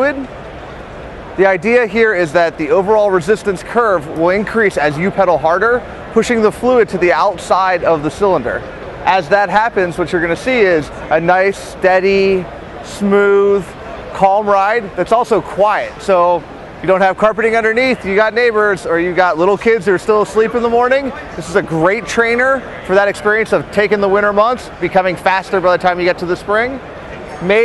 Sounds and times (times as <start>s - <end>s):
Speech: 0.0s - 0.3s, 1.4s - 27.6s.